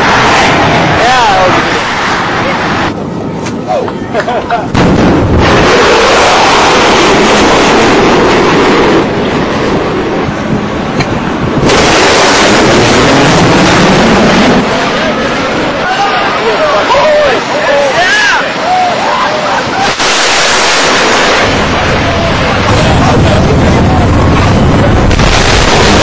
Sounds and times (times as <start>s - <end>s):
Speech: 22.0s - 25.1s.